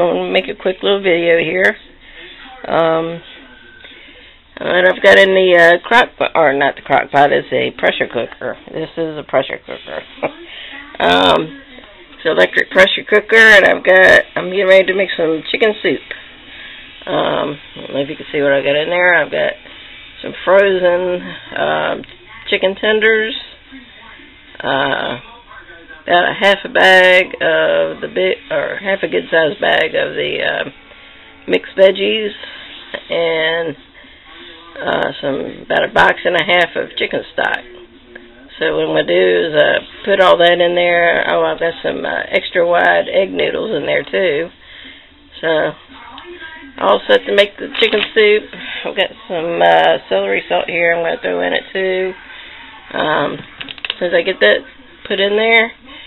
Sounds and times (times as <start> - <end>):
Speech: 0.0 - 3.7, 4.6 - 16.2, 20.2 - 30.7, 45.4 - 56.0.